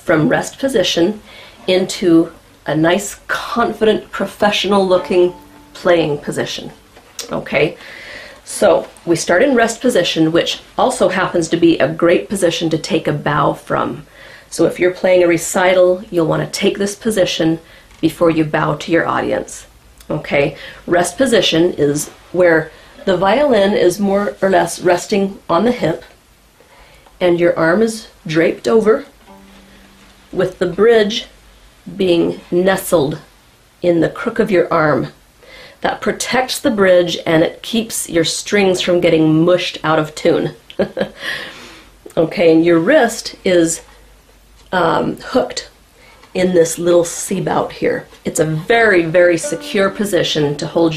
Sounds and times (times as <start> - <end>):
Speech: 0.0 - 7.8, 8.4 - 26.2, 27.2 - 29.2, 30.3 - 31.3, 31.9 - 35.2, 35.8 - 41.1, 42.1 - 43.9, 44.7 - 50.9.